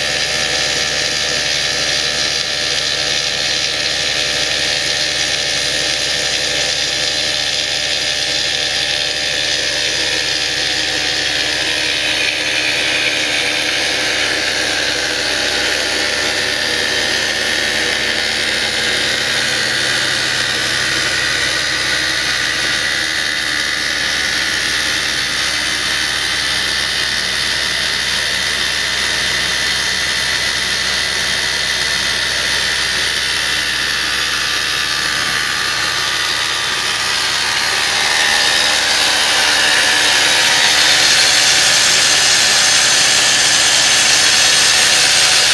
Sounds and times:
Drill: 0:00.0 - 0:45.5.

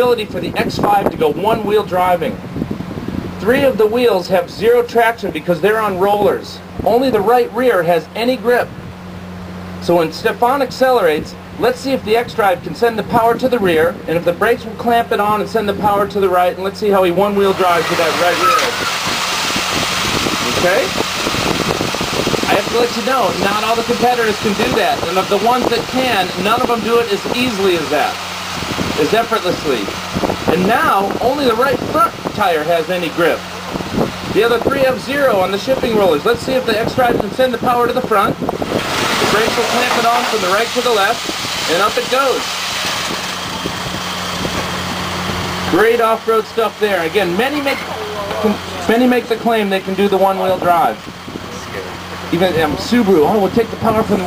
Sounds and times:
Speech: 0:00.0 - 0:02.4, 0:03.4 - 0:08.7, 0:09.8 - 0:18.8, 0:20.4 - 0:21.0, 0:22.5 - 0:28.2, 0:29.0 - 0:29.9, 0:30.5 - 0:33.4, 0:34.4 - 0:38.4, 0:39.2 - 0:42.4, 0:45.7 - 0:54.2.

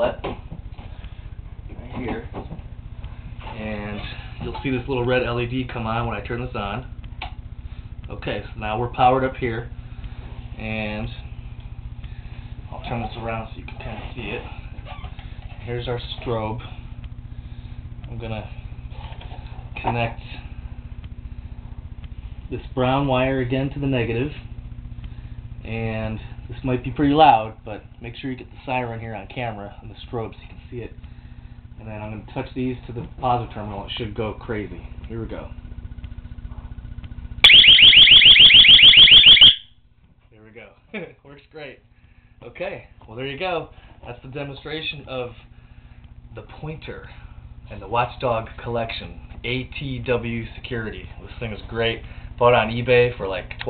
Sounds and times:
Speech: 0:03.4 - 0:06.9, 0:08.1 - 0:09.7, 0:10.6 - 0:11.3, 0:12.7 - 0:14.6, 0:15.6 - 0:16.8, 0:18.1 - 0:18.6, 0:19.8 - 0:20.5, 0:22.5 - 0:24.5, 0:25.6 - 0:31.0, 0:31.8 - 0:35.6, 0:40.3 - 0:41.8, 0:42.4 - 0:45.4, 0:46.3 - 0:53.6
Alarm: 0:37.4 - 0:39.8.

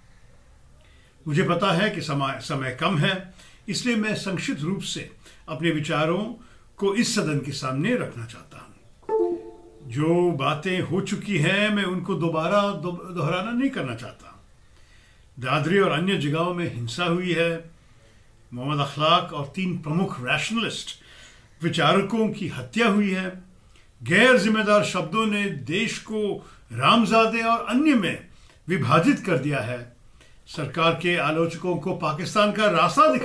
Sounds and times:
Narration, monologue: 0:00.8 - 0:33.2
Male speech, man speaking: 0:01.3 - 0:08.8, 0:09.9 - 0:14.4, 0:15.4 - 0:17.7, 0:18.6 - 0:21.0, 0:21.6 - 0:23.4, 0:24.0 - 0:33.2.

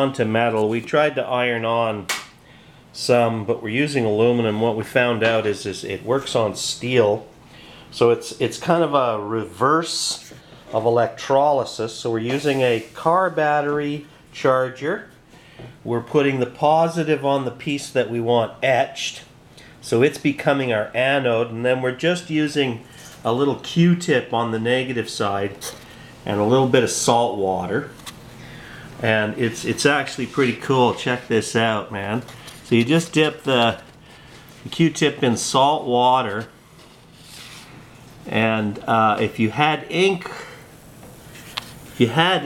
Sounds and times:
Speech: 0:00.0 - 0:02.1, 0:03.0 - 0:15.2, 0:15.8 - 0:28.0, 0:29.0 - 0:33.9, 0:34.6 - 0:36.5, 0:38.2 - 0:40.6, 0:42.0 - 0:42.4.

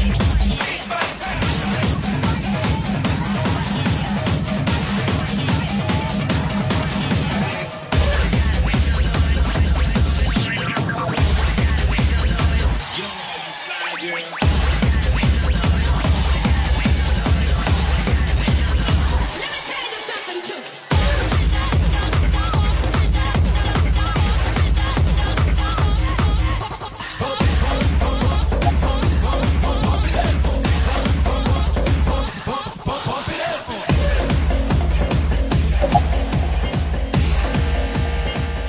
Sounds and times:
Techno: 0:00.0 - 0:38.6
Speech: 0:12.2 - 0:14.4.

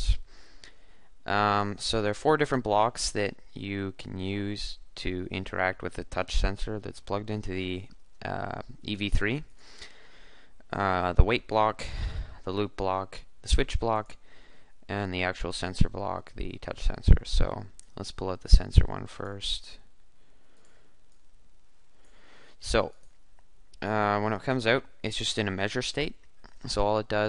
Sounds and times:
Speech: 0:00.0 - 0:00.3, 0:01.3 - 0:09.5, 0:10.7 - 0:14.2, 0:14.9 - 0:19.9, 0:22.6 - 0:23.0, 0:23.8 - 0:27.2.

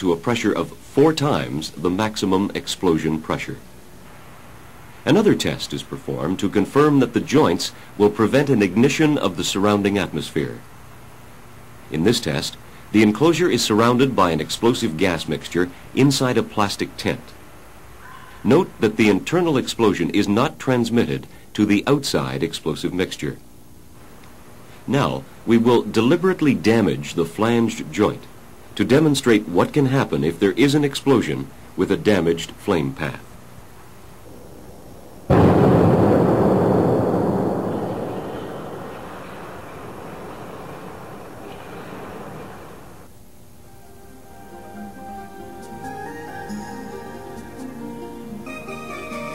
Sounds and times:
Speech: 0:00.0 - 0:03.7, 0:05.0 - 0:10.6, 0:11.9 - 0:17.4, 0:18.4 - 0:23.4, 0:24.9 - 0:33.3.

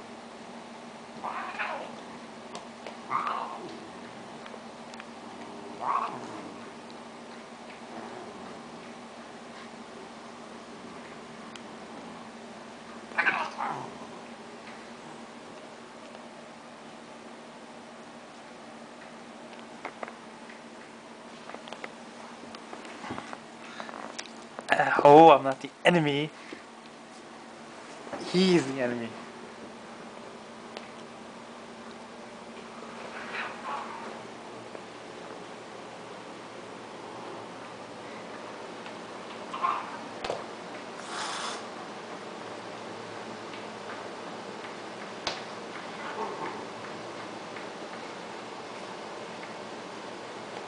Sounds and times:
Inside, small room: 0:00.0 - 0:50.6
Caterwaul: 0:01.2 - 0:02.0, 0:03.1 - 0:03.7, 0:05.8 - 0:06.6, 0:13.2 - 0:13.9.

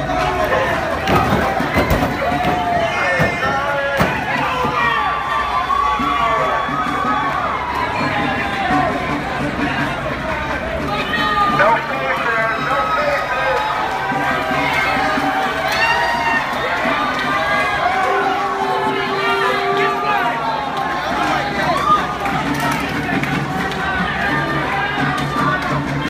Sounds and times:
Music: 0:00.0 - 0:26.0.

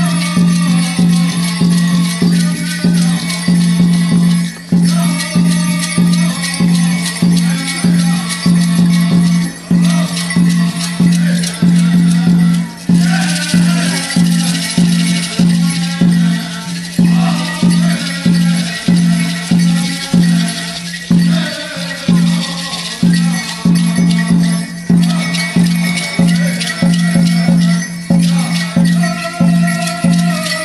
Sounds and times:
Music: 0:00.0 - 0:30.6.

